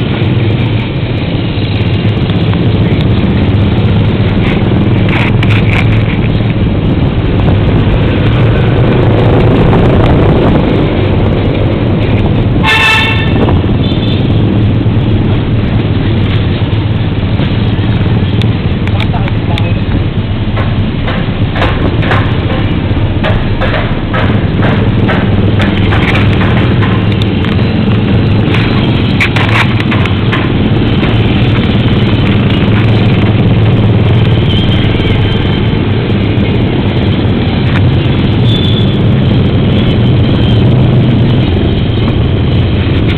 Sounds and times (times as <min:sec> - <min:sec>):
Speech: 0:18.9 - 0:19.9.